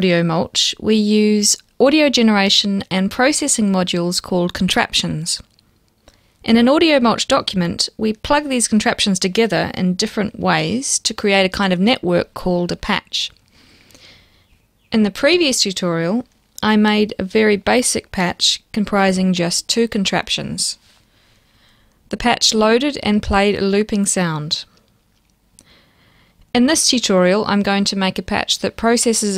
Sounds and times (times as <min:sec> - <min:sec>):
Speech: 0:00.0 - 0:05.5, 0:06.5 - 0:13.4, 0:14.9 - 0:20.8, 0:22.1 - 0:24.7, 0:26.6 - 0:29.3.